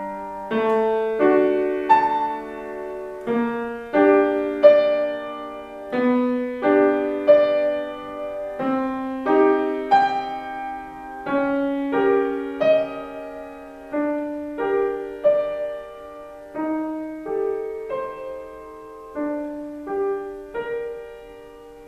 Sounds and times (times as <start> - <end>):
Piano: 0.0 - 21.8.